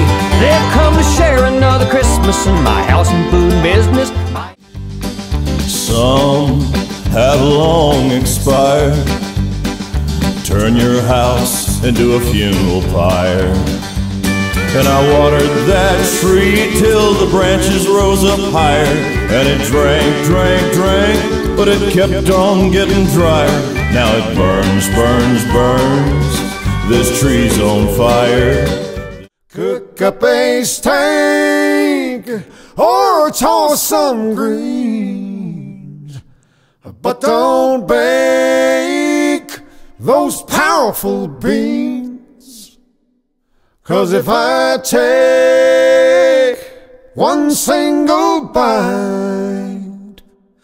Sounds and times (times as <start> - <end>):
Country: 0.0 - 29.3.